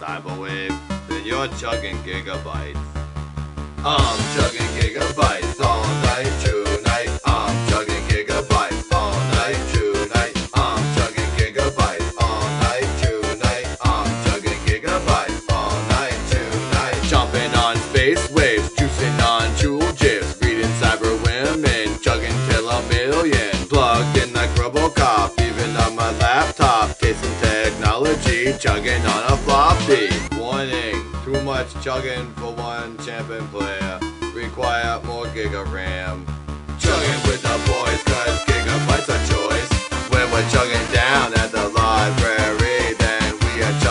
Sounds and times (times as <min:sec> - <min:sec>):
Music: 0:00.0 - 0:43.9.